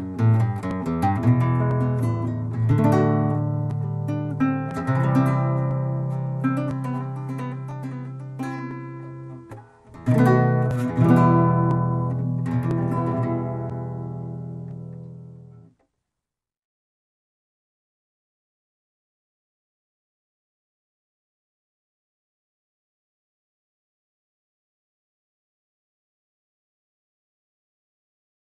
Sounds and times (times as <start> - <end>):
Flamenco: 0.0 - 15.7
Acoustic guitar: 0.0 - 15.9.